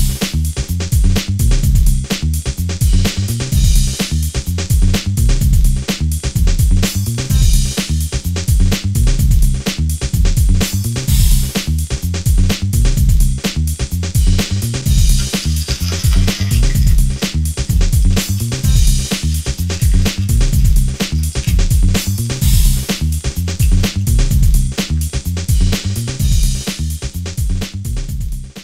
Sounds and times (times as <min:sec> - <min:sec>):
Music: 0:00.0 - 0:28.6.